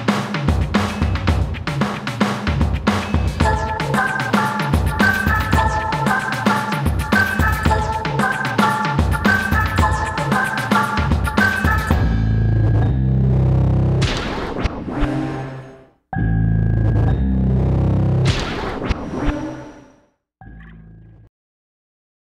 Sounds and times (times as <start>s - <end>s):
Music: 0.0s - 14.2s, 15.0s - 18.5s.